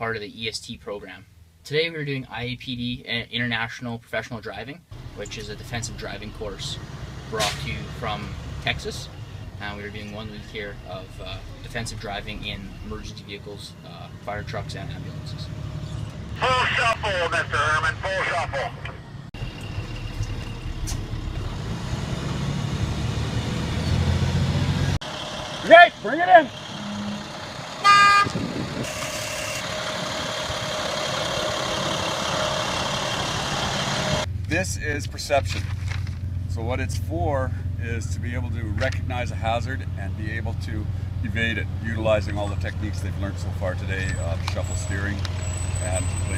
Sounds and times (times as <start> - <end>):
Speech: 0.0 - 15.5, 16.4 - 19.0, 25.7 - 26.5, 34.5 - 35.6, 36.5 - 45.2, 45.8 - 46.3
Truck: 4.9 - 46.3.